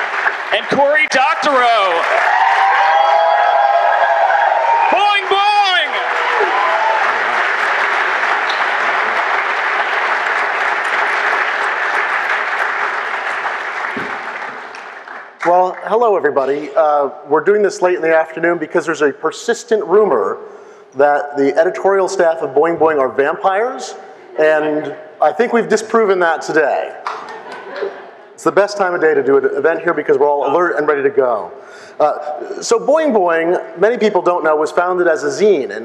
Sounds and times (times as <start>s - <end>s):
Speech: 0.5s - 2.0s, 4.9s - 6.0s, 15.4s - 20.4s, 21.0s - 27.0s, 28.4s - 35.8s.